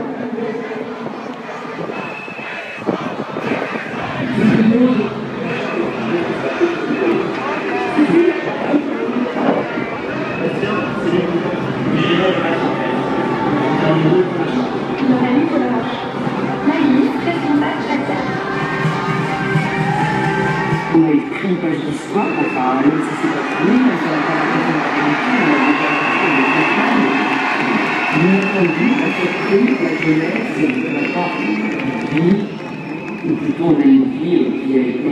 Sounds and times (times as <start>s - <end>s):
Speech: 3.4s - 9.8s, 10.4s - 18.4s, 20.9s - 32.6s, 33.2s - 35.1s.